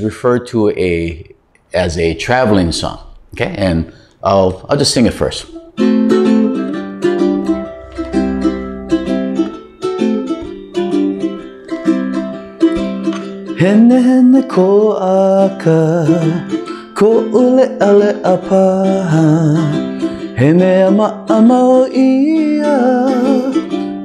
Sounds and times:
Guitar: 5.2s - 24.0s
Mandolin: 5.2s - 24.0s.

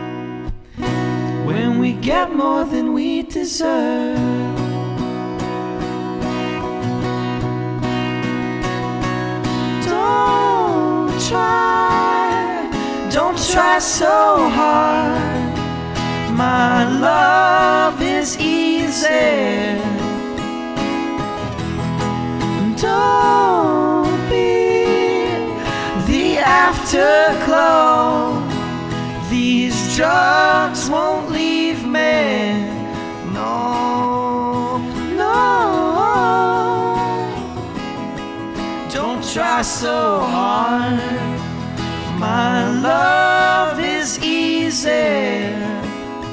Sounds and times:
Music: 0.0s - 46.3s
Singing: 1.4s - 4.7s, 9.8s - 15.6s, 16.3s - 20.1s, 22.6s - 37.5s, 38.9s - 41.4s, 42.1s - 46.0s.

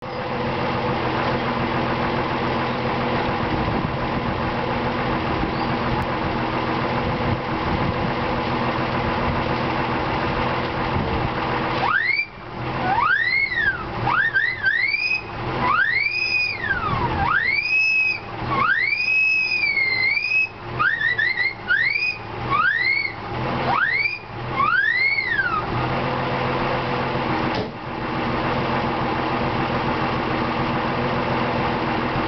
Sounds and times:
Car: 0.0s - 32.2s
Engine: 0.0s - 32.2s.

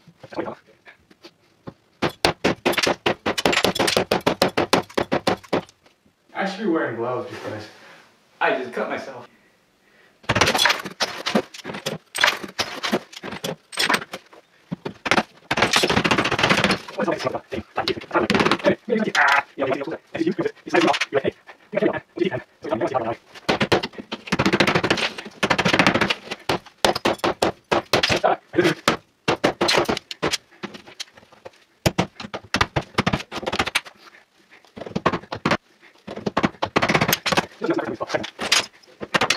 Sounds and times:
Speech: 0.3s - 0.7s, 6.3s - 7.8s, 8.4s - 9.3s, 17.0s - 23.2s, 37.6s - 38.3s.

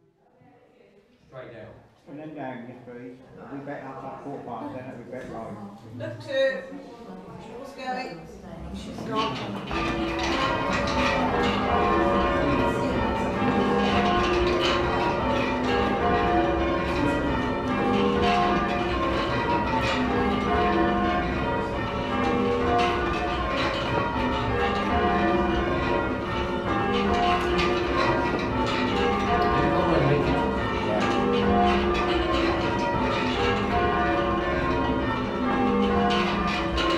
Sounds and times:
Change ringing (campanology): 8.9s - 36.9s.

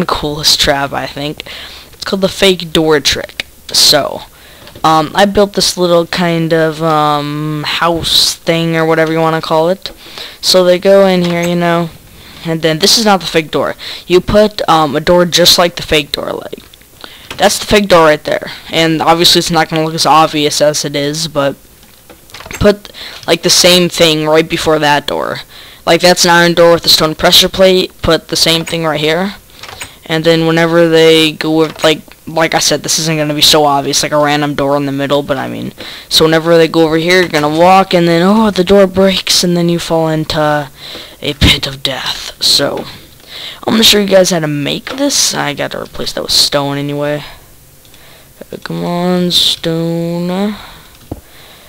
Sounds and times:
Speech: 0.0s - 16.7s, 17.4s - 21.6s, 22.6s - 29.4s, 30.0s - 43.0s, 43.6s - 47.4s, 48.4s - 50.8s.

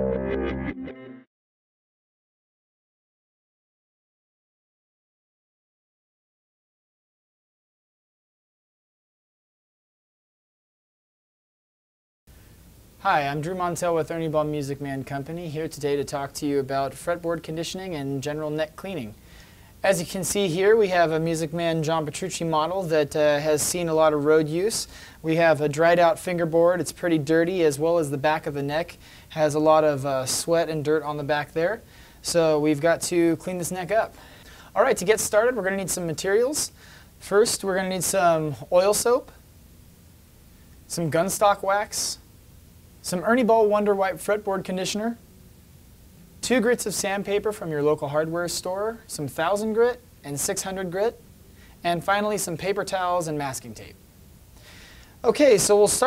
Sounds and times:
Speech: 13.0s - 19.2s, 19.8s - 34.2s, 34.8s - 39.4s, 40.9s - 42.2s, 43.0s - 45.2s, 46.4s - 51.2s, 51.8s - 54.0s, 55.2s - 56.0s.

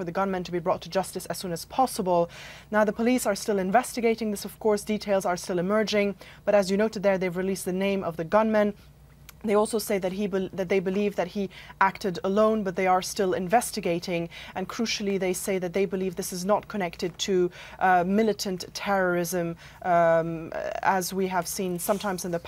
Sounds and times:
Speech: 0.0s - 8.8s, 9.4s - 22.4s.

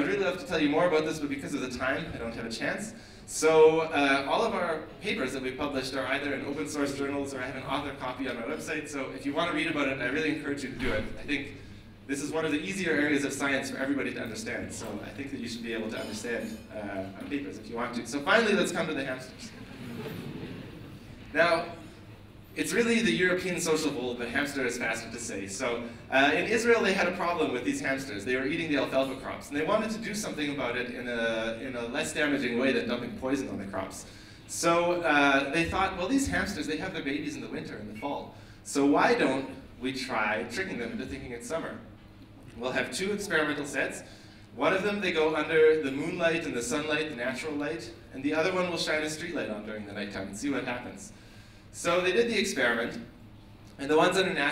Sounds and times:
Male speech, man speaking: 0.0s - 19.6s, 21.3s - 21.8s, 22.6s - 41.8s, 42.6s - 51.1s, 51.8s - 53.1s, 53.8s - 54.5s.

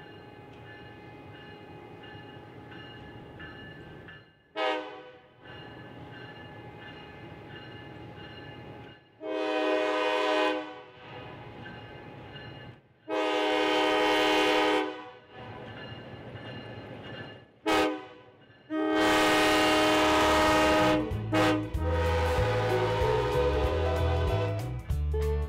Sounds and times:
Railroad car, train wagon: 0.0s - 25.4s
Train horn: 4.6s - 5.3s, 9.2s - 11.1s, 13.1s - 15.2s, 17.6s - 25.4s.

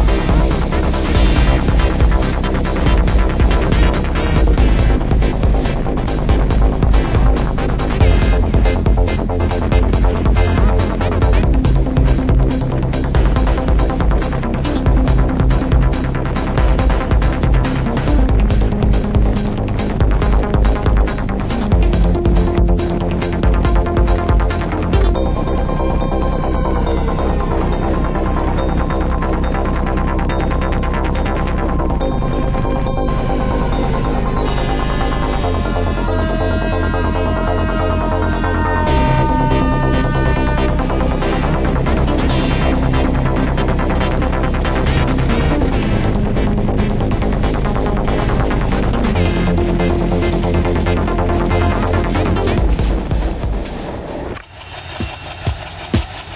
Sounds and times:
Electronica: 0.0s - 56.3s.

